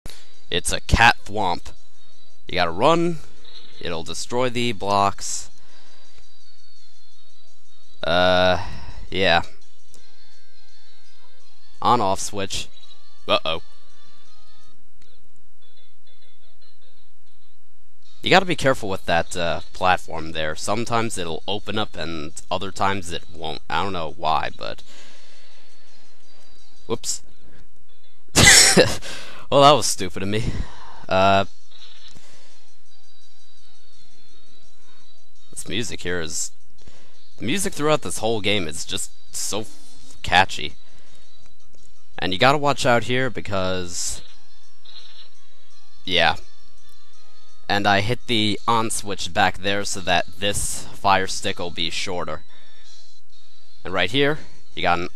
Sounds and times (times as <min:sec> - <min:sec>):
Speech: 0:00.5 - 0:01.7, 0:02.5 - 0:05.5, 0:08.0 - 0:09.5, 0:11.8 - 0:12.7, 0:13.3 - 0:13.6, 0:18.3 - 0:24.8, 0:26.9 - 0:27.2, 0:28.4 - 0:31.5, 0:35.6 - 0:36.5, 0:37.4 - 0:40.8, 0:42.2 - 0:44.2, 0:46.1 - 0:46.4, 0:47.7 - 0:52.4, 0:53.9 - 0:55.1.